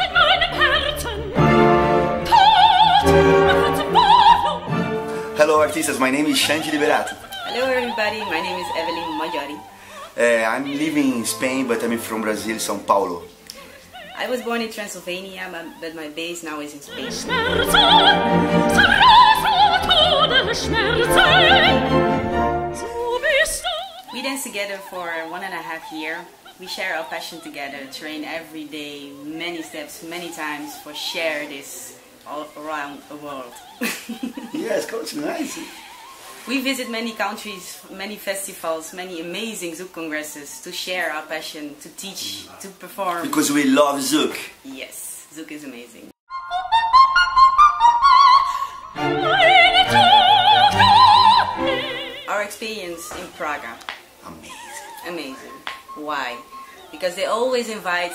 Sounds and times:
Opera: 0.0s - 40.7s, 46.3s - 58.1s.

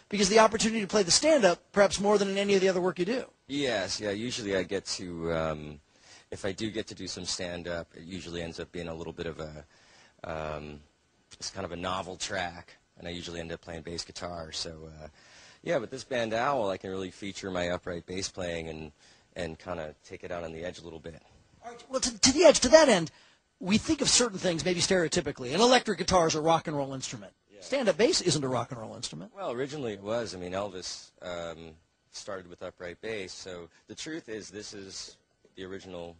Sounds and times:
Speech: 0.1s - 36.1s.

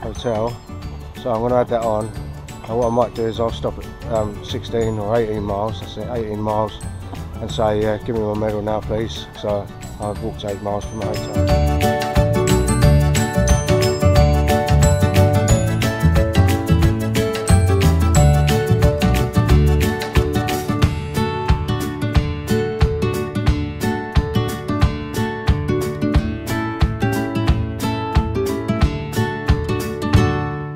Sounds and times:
Speech: 0.0s - 0.6s, 1.2s - 2.1s, 2.7s - 6.8s, 7.4s - 11.4s
Music: 0.0s - 30.7s.

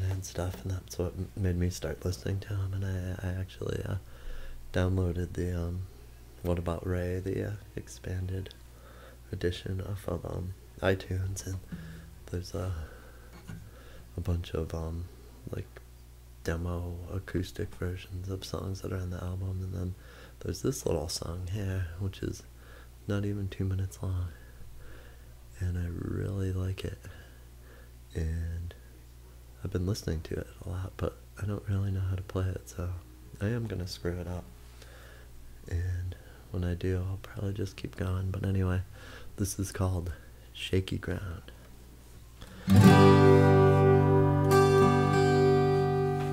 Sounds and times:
Speech: 0.0s - 4.1s, 4.7s - 8.6s, 9.3s - 12.9s, 14.2s - 15.8s, 16.4s - 24.4s, 25.6s - 27.2s, 28.1s - 28.9s, 29.6s - 34.5s, 35.7s - 41.6s
Guitar: 9.5s - 14.9s, 42.4s - 46.3s.

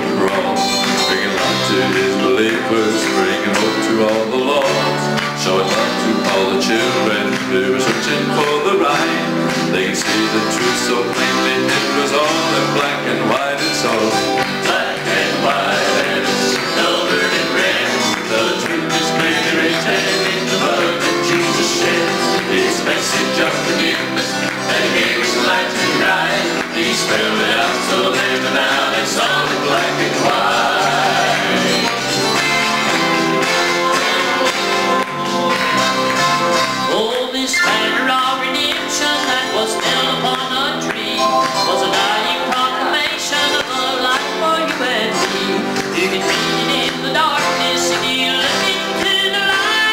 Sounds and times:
Male singing: 0.0s - 31.6s, 36.9s - 49.9s
Music: 0.0s - 49.9s.

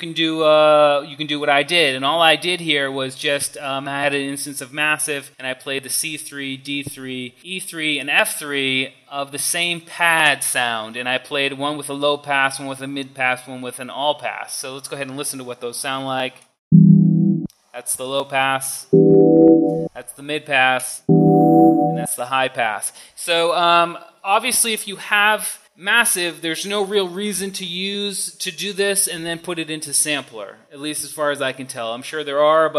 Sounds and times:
Speech: 0.0s - 16.4s, 17.8s - 18.9s, 19.9s - 21.1s, 21.8s - 32.7s
Sampler: 16.8s - 17.5s, 19.0s - 19.9s, 21.1s - 22.1s.

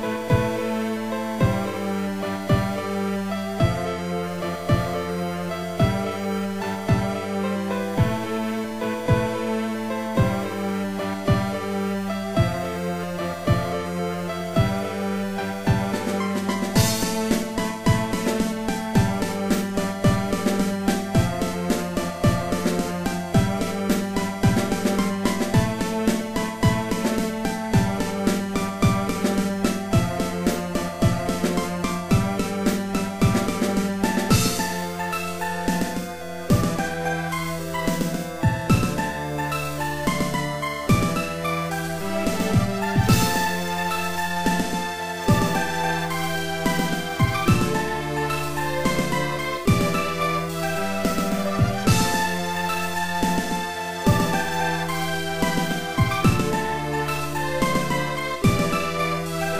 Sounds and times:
Soundtrack music: 0.0s - 59.5s
Theme music: 0.0s - 59.5s
Video game music: 0.0s - 59.5s.

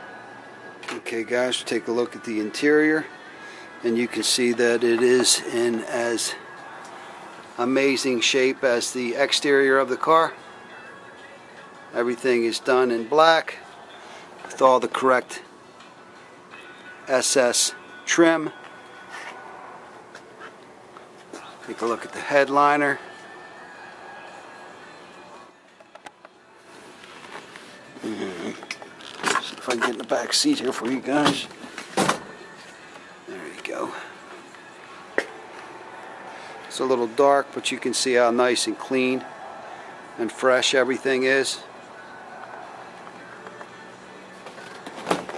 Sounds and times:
Inside, public space: 0.0s - 1.6s, 6.2s - 7.6s, 17.8s - 21.7s, 23.0s - 29.8s, 39.2s - 40.7s, 41.4s - 45.3s
Music: 0.0s - 45.3s
Speech: 0.9s - 3.1s, 3.8s - 6.4s, 7.6s - 10.4s, 12.0s - 13.6s, 17.1s - 18.5s, 21.6s - 23.0s, 29.6s - 31.5s, 33.3s - 34.0s, 36.7s - 39.2s, 40.2s - 41.7s.

